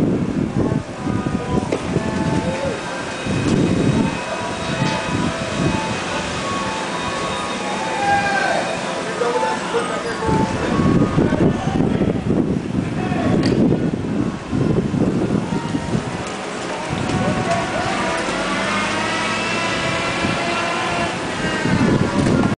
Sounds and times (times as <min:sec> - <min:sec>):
Car passing by: 0:16.6 - 0:22.4.